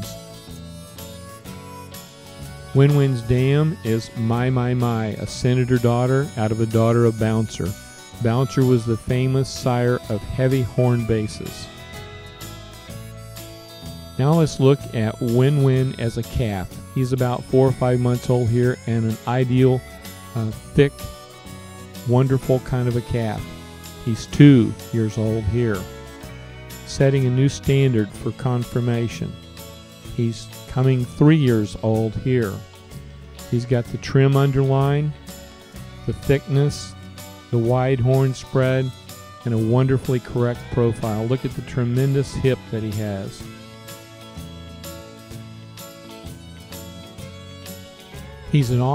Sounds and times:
Music: 0.0 - 48.9
Speech: 2.7 - 11.7, 14.2 - 19.8, 20.4 - 21.2, 22.0 - 25.9, 26.8 - 29.4, 30.1 - 32.6, 33.5 - 35.2, 36.1 - 43.5, 48.5 - 48.9.

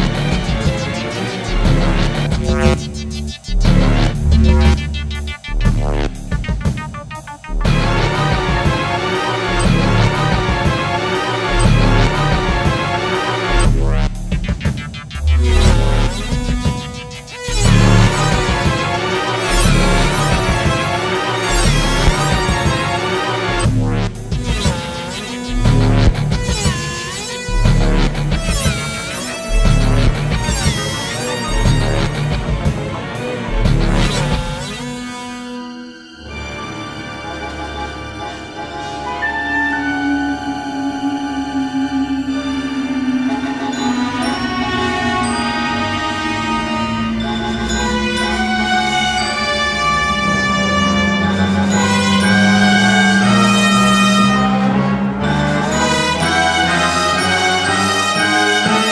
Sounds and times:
Orchestra: 0.0 - 58.9.

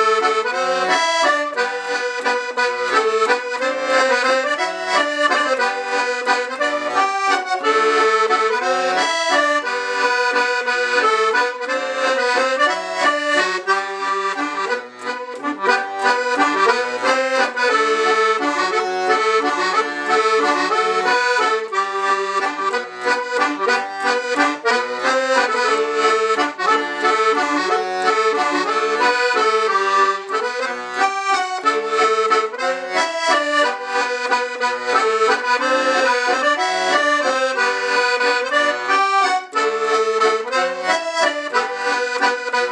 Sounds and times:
Accordion: 0.0 - 42.7.

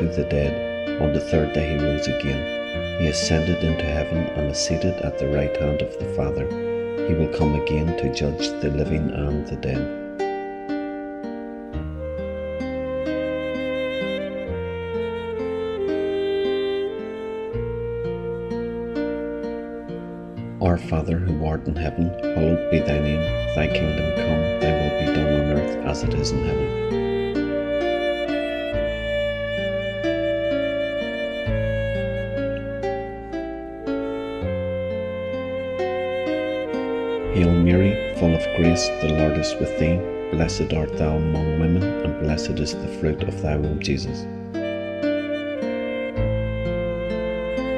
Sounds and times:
Speech: 0.0 - 9.9, 20.6 - 26.8, 37.3 - 44.2
Background music: 0.0 - 47.7
New-age music: 0.0 - 47.7.

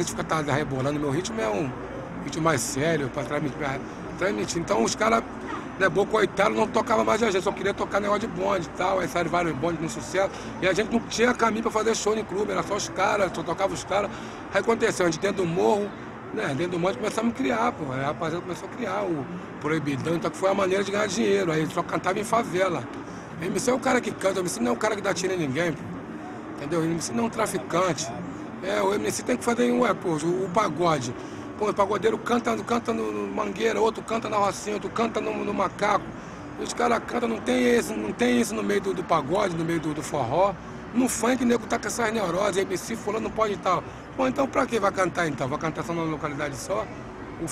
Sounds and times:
Speech: 0.0 - 25.9, 26.6 - 47.5.

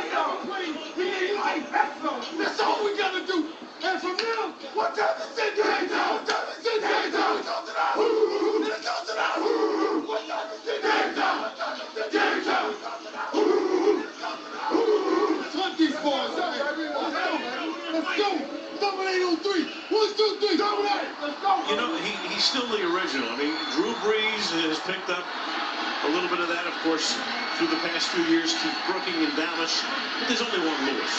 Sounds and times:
Speech: 15.4 - 25.3, 26.0 - 31.1.

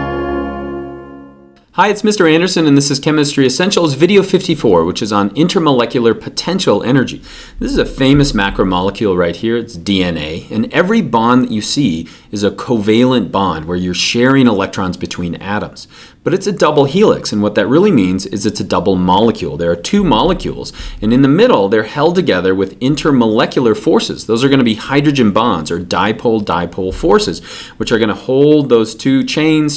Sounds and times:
Speech: 1.7 - 29.7.

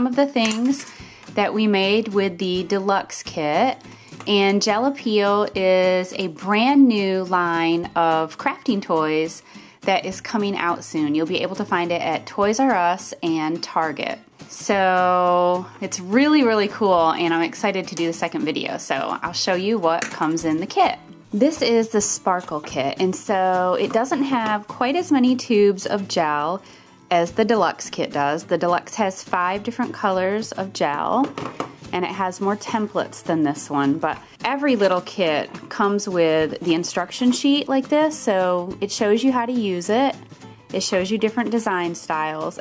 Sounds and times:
Speech: 0.0 - 31.3, 32.0 - 40.2, 40.8 - 42.6
Music: 0.0 - 42.6.

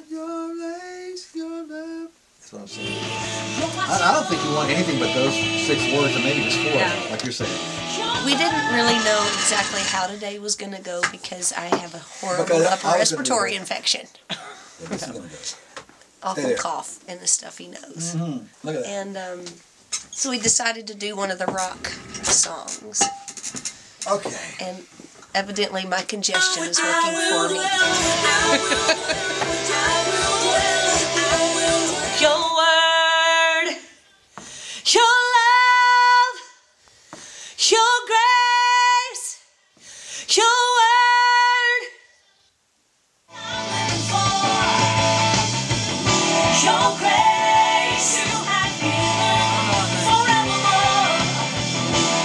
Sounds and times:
Music: 2.7 - 10.0, 26.4 - 32.6, 43.3 - 52.2
Speech: 3.9 - 7.5, 8.2 - 14.1, 14.8 - 15.6, 16.2 - 19.6, 20.2 - 23.1, 24.1 - 27.6.

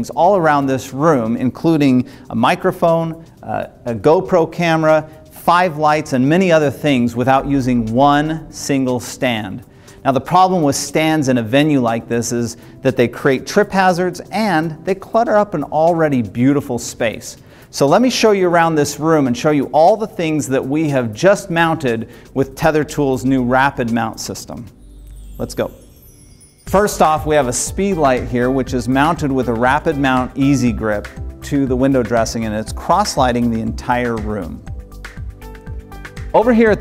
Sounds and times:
Speech: 0.0 - 24.7, 25.4 - 25.8, 26.7 - 34.6, 36.4 - 36.8
Music: 0.0 - 36.8.

